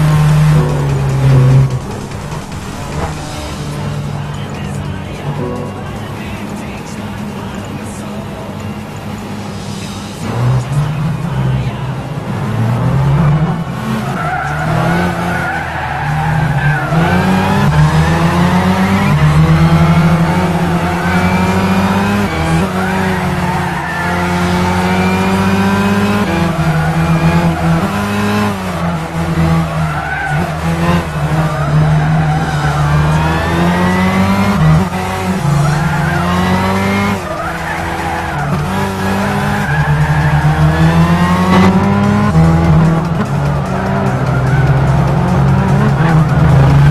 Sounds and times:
Music: 0:00.0 - 0:46.9.

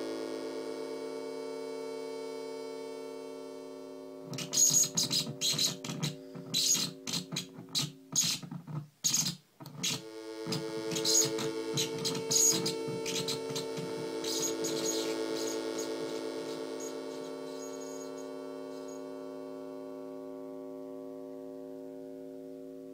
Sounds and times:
White noise: 0:04.2 - 0:19.0.

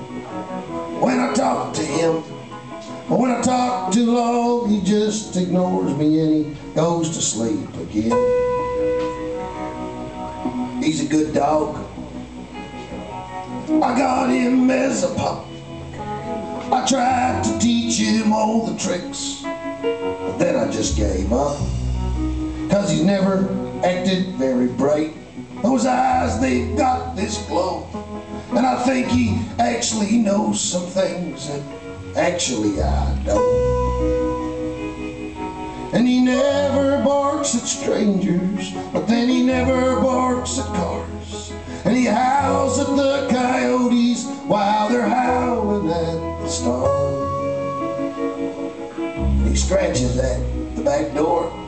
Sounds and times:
Music: 0:00.0 - 0:51.6.

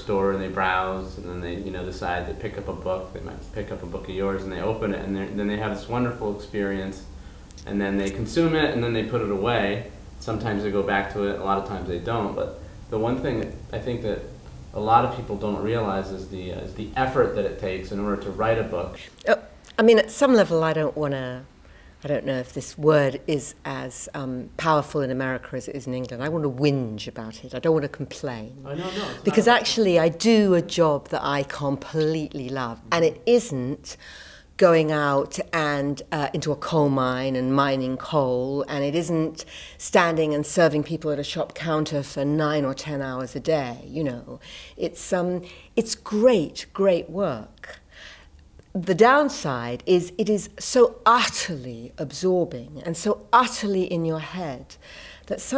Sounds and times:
Speech: 0:07.6 - 0:33.9.

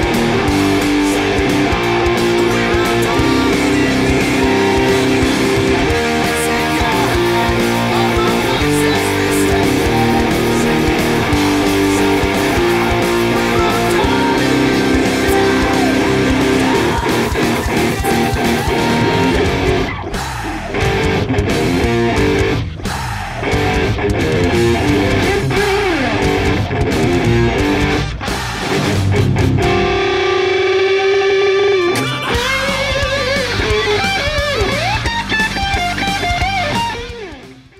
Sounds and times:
Guitar: 0:00.0 - 0:37.7.

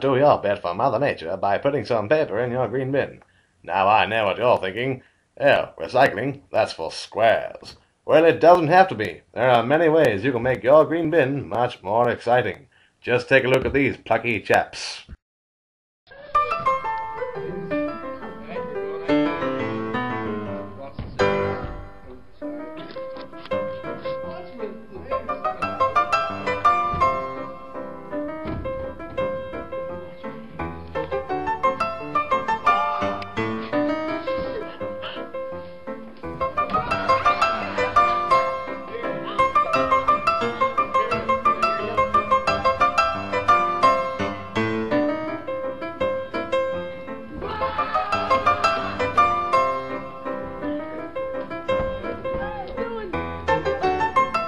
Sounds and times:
House music: 0:29.0 - 0:35.5, 0:36.1 - 0:51.2.

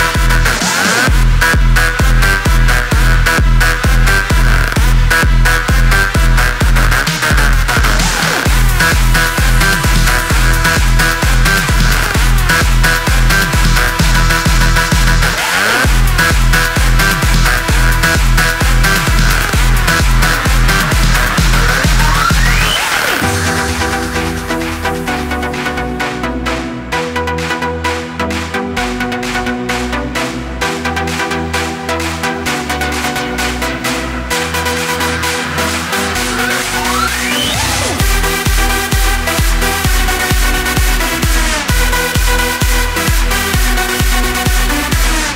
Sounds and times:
Electronic dance music: 0:00.0 - 0:45.3.

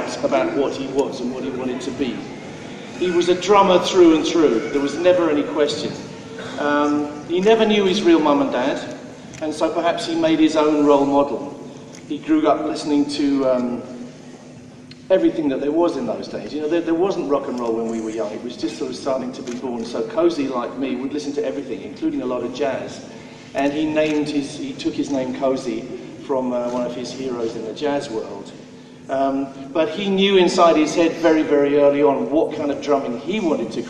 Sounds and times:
Male speech, man speaking: 0:00.0 - 0:02.3, 0:03.0 - 0:13.9, 0:15.1 - 0:33.9
Narration, monologue: 0:00.0 - 0:33.9.

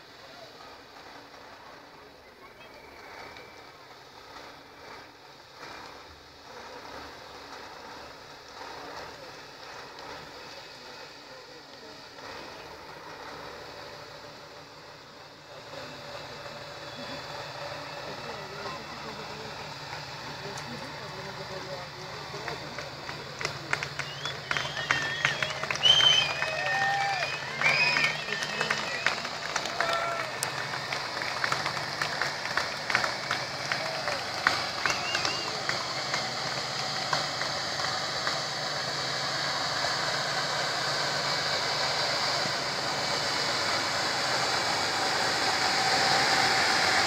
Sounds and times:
Speech: 0:00.0 - 0:05.2, 0:08.6 - 0:13.4, 0:15.1 - 0:30.8, 0:33.7 - 0:36.3
Truck: 0:00.0 - 0:47.0.

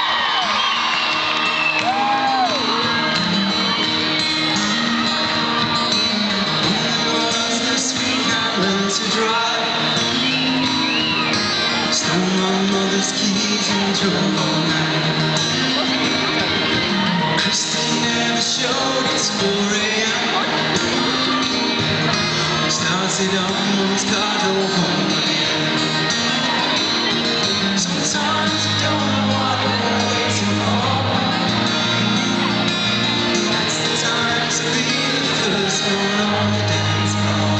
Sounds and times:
Music: 0:00.0 - 0:37.5.

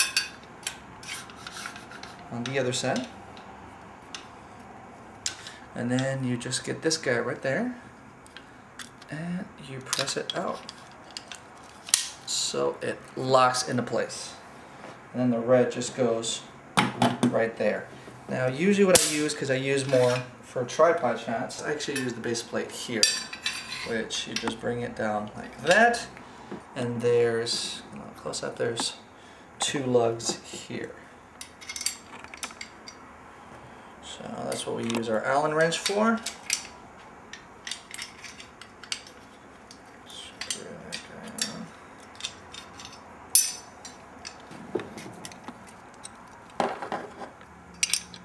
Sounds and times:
Speech: 0:02.3 - 0:03.1, 0:05.8 - 0:07.8, 0:09.1 - 0:10.7, 0:12.3 - 0:14.4, 0:15.1 - 0:16.5, 0:17.2 - 0:23.2, 0:23.9 - 0:26.2, 0:26.8 - 0:29.0, 0:29.6 - 0:31.0, 0:34.0 - 0:36.3, 0:40.1 - 0:41.7.

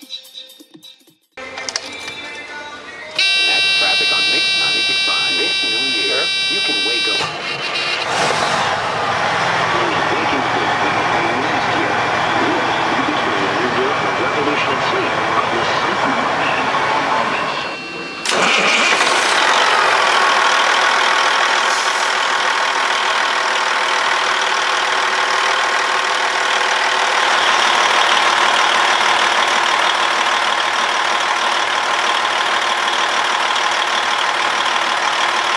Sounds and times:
Truck: 0:01.4 - 0:35.5.

